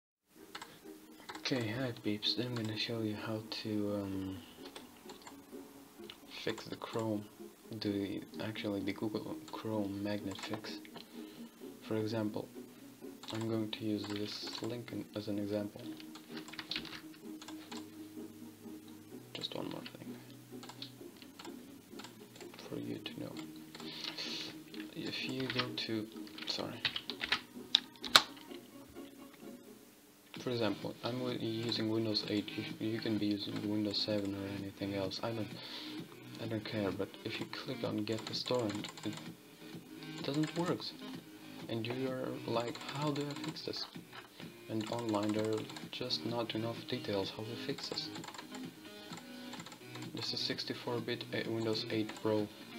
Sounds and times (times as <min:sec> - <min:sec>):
Speech: 0:01.4 - 0:04.4, 0:06.3 - 0:10.8, 0:11.9 - 0:12.5, 0:13.3 - 0:15.9, 0:19.4 - 0:20.1, 0:22.6 - 0:23.4, 0:25.0 - 0:26.8, 0:30.4 - 0:35.6, 0:36.4 - 0:39.2, 0:40.2 - 0:41.0, 0:41.7 - 0:44.0, 0:44.7 - 0:48.2, 0:50.2 - 0:52.5.